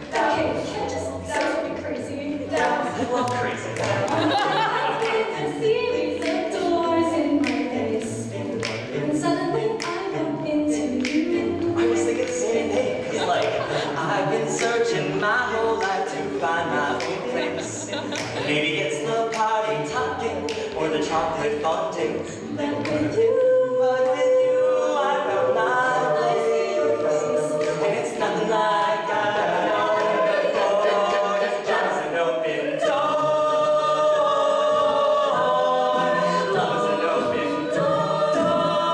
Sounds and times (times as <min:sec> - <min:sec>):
Music: 0:00.0 - 0:38.9.